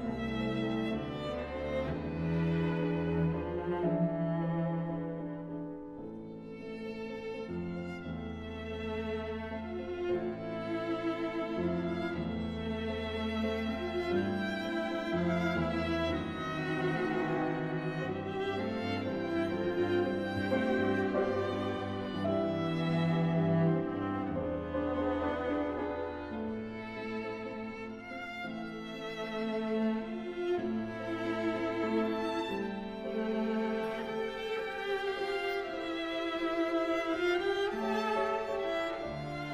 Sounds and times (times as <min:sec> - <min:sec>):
Cello: 0:00.0 - 0:39.5
Violin, fiddle: 0:00.0 - 0:39.5.